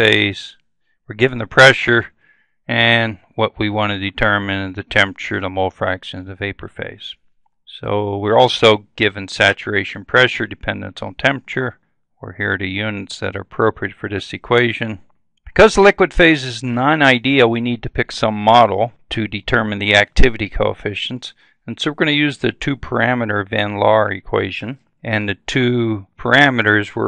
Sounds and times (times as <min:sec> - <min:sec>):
Speech: 0:00.0 - 0:27.0.